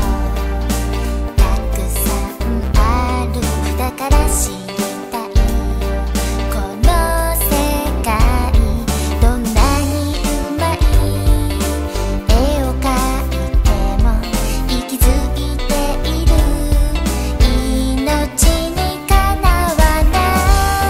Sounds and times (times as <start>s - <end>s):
Music for children: 0.0s - 20.9s.